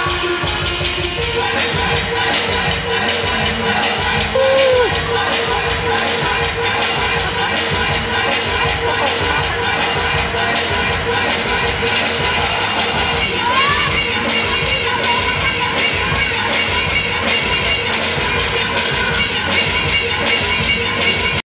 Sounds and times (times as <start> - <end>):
Techno: 0.0 - 21.4.